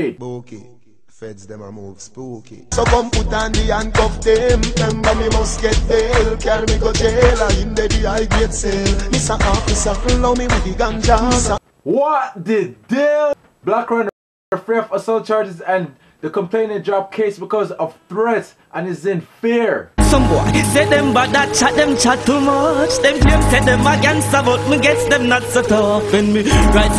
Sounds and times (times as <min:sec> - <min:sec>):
Speech: 0:00.0 - 0:00.6, 0:11.9 - 0:20.8
Music: 0:02.7 - 0:11.6, 0:20.0 - 0:26.9.